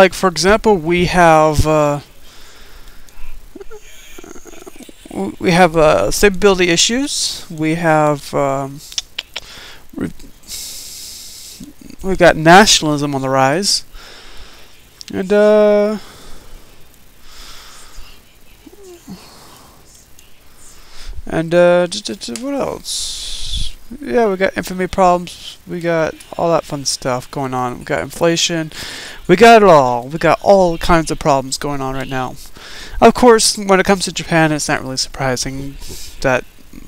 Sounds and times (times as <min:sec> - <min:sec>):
Speech: 0:00.0 - 0:02.1, 0:03.2 - 0:08.8, 0:10.0 - 0:10.3, 0:11.6 - 0:13.9, 0:15.0 - 0:16.0, 0:21.2 - 0:36.8.